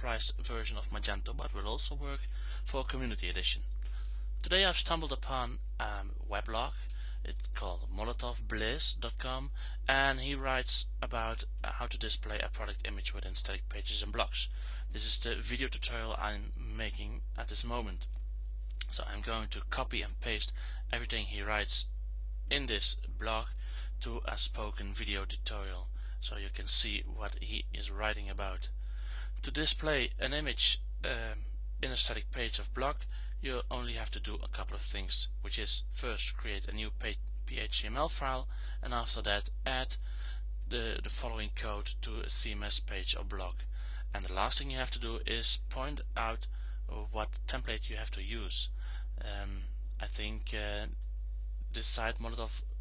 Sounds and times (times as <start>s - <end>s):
Speech: 0.0s - 3.7s, 4.4s - 18.1s, 18.8s - 21.9s, 22.5s - 28.8s, 29.4s - 40.0s, 40.7s - 51.0s, 51.7s - 52.7s.